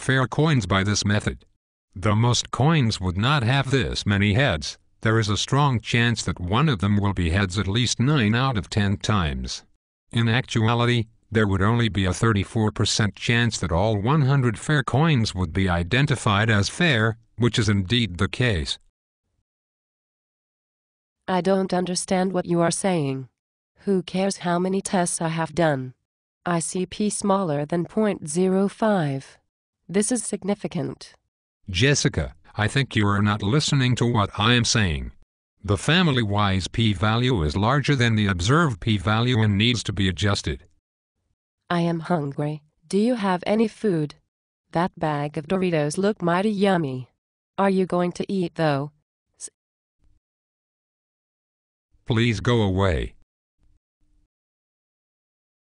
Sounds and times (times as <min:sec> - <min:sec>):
Speech: 0:00.0 - 0:18.9, 0:21.3 - 0:40.7, 0:41.7 - 0:44.2, 0:44.8 - 0:49.5, 0:52.1 - 0:53.2.